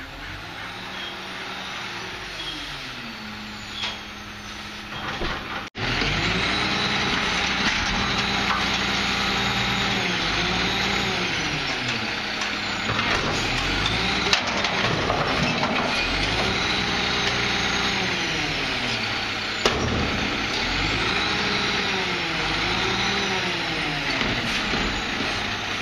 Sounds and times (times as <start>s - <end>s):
Truck: 0.0s - 25.8s.